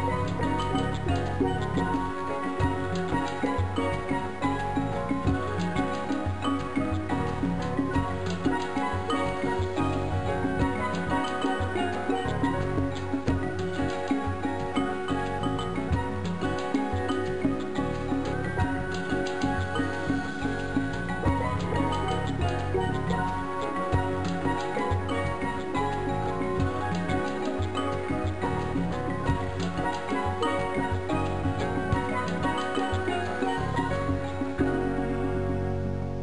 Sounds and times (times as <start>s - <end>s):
Music: 0.0s - 36.2s.